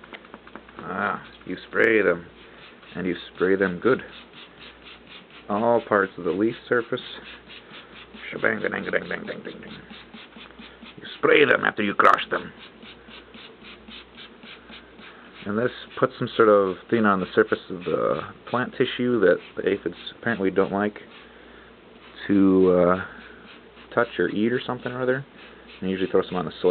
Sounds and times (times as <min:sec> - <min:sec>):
Speech: 0:00.8 - 0:02.3, 0:02.9 - 0:04.1, 0:05.5 - 0:07.2, 0:08.2 - 0:09.8, 0:11.0 - 0:12.6, 0:15.4 - 0:21.1, 0:22.2 - 0:23.1, 0:23.9 - 0:26.7
Spray: 0:02.0 - 0:11.2, 0:12.3 - 0:16.3, 0:17.2 - 0:21.3, 0:22.0 - 0:26.7.